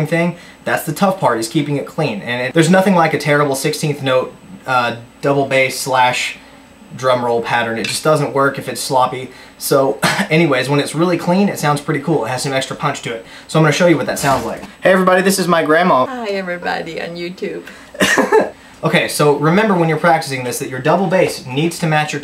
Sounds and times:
Speech: 0.0s - 17.7s, 18.8s - 22.2s.

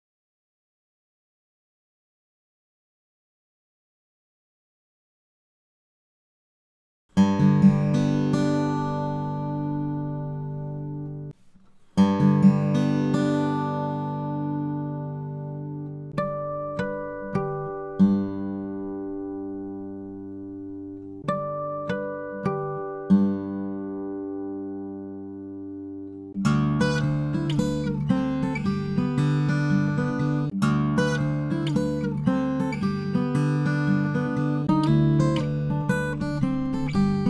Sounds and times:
Electronic tuner: 7.1s - 37.2s
Inside, small room: 7.1s - 37.2s
Music: 7.1s - 37.2s.

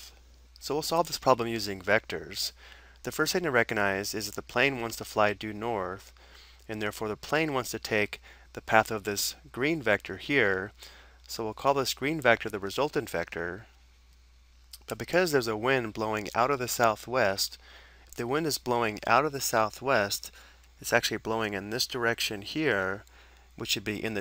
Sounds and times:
Speech: 0.0s - 6.1s, 6.7s - 13.7s, 14.8s - 17.6s, 18.2s - 24.2s.

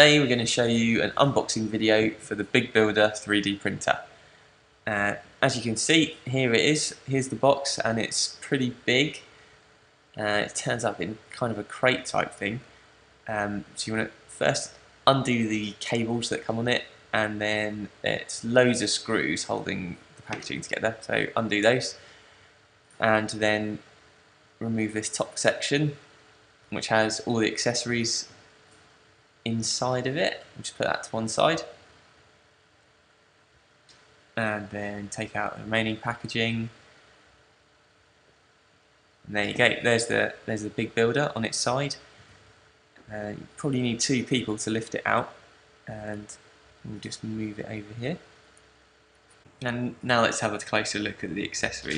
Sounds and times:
Speech: 0.0s - 4.2s, 4.9s - 9.3s, 10.2s - 12.7s, 13.3s - 22.0s, 23.0s - 23.9s, 24.6s - 26.0s, 26.7s - 28.3s, 29.5s - 31.8s, 34.4s - 36.8s, 39.3s - 42.1s, 43.0s - 48.2s, 49.6s - 51.9s.

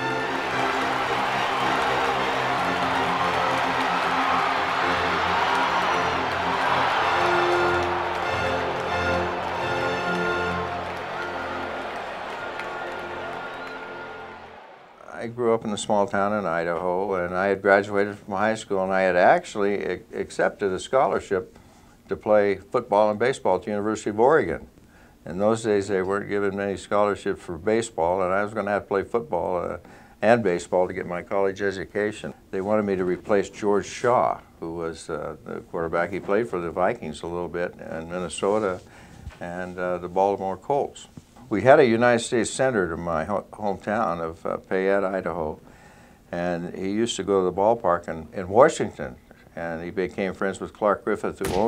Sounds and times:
Speech: 15.0s - 21.5s, 22.1s - 45.6s, 46.3s - 51.6s.

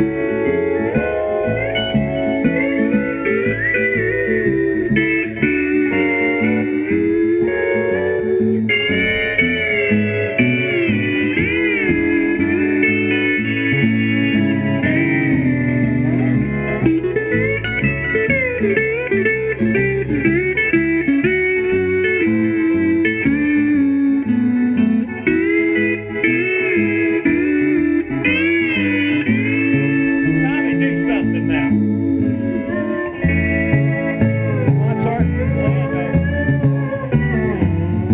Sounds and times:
Steel guitar, slide guitar: 0.0s - 38.1s.

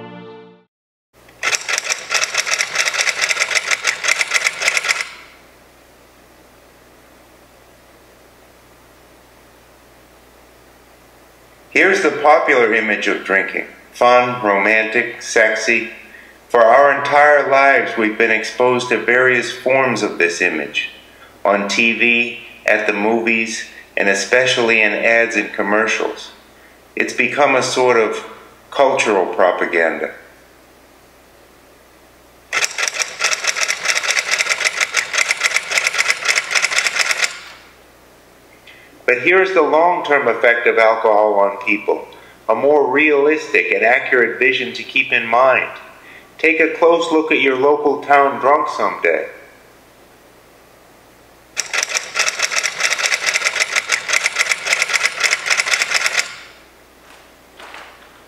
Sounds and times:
Speech: 11.8s - 26.4s, 27.0s - 30.3s, 39.1s - 49.6s.

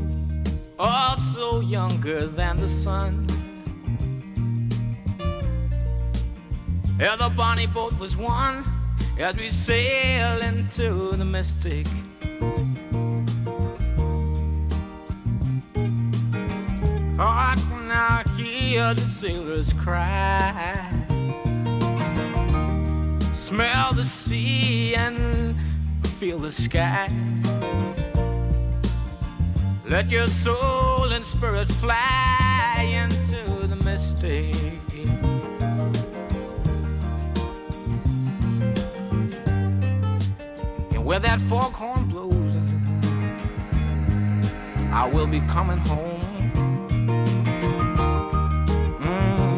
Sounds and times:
Happy music: 0.0s - 49.5s.

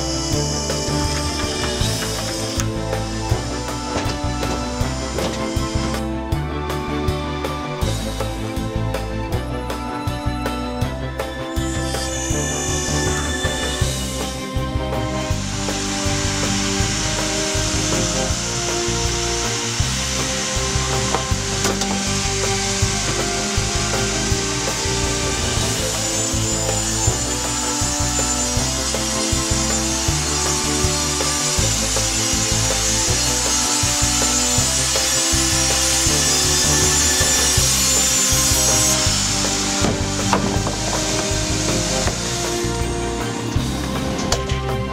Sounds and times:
Music: 0.0s - 44.9s.

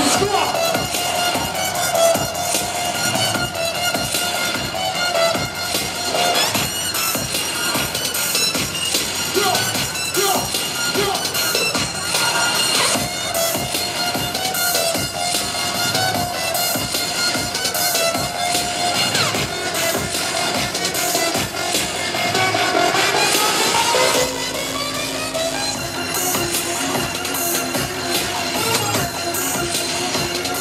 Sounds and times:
Exciting music: 0.0s - 30.6s.

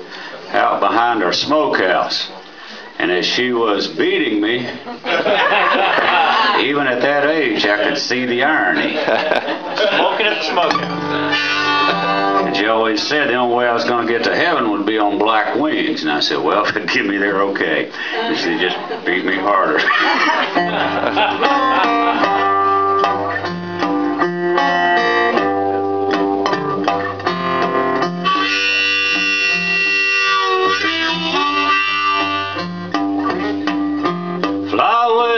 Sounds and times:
Speech: 0.5s - 2.4s, 3.0s - 4.8s, 6.5s - 9.0s, 12.5s - 19.9s
Music: 10.6s - 15.9s, 20.3s - 35.3s.

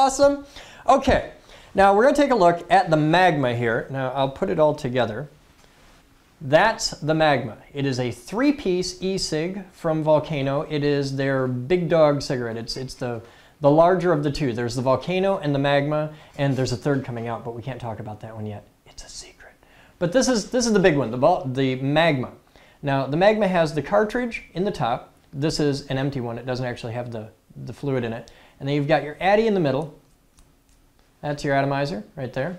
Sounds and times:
Speech: 0.0s - 5.4s, 6.4s - 30.0s, 31.2s - 32.5s.

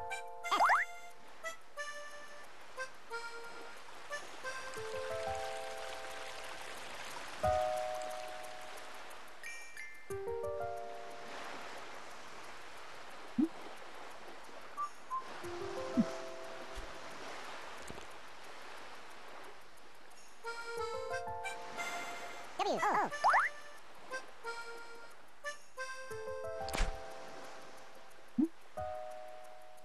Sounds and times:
Music: 0.0s - 12.2s, 14.6s - 17.4s, 20.0s - 29.8s
Stream: 0.0s - 29.8s.

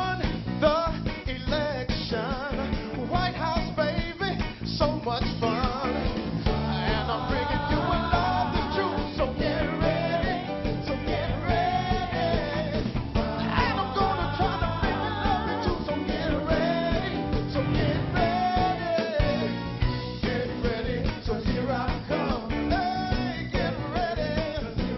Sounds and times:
Music: 0.0s - 24.9s.

